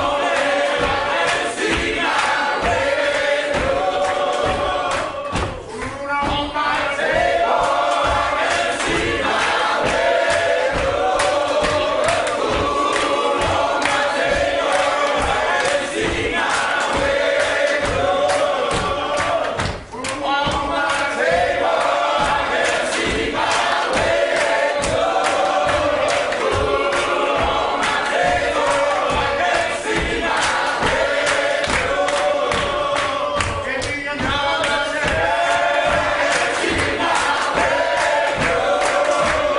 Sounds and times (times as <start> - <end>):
Music: 0.0 - 39.5
Male speech, man speaking: 5.7 - 7.0, 20.0 - 21.2.